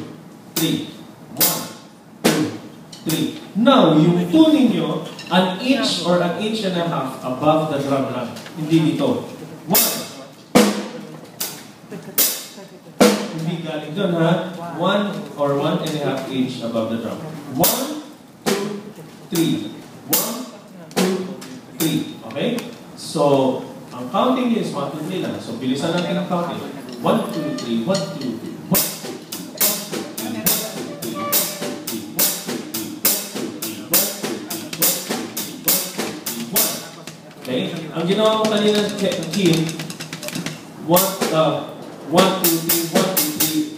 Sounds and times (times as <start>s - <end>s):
Speech: 0.0s - 43.7s.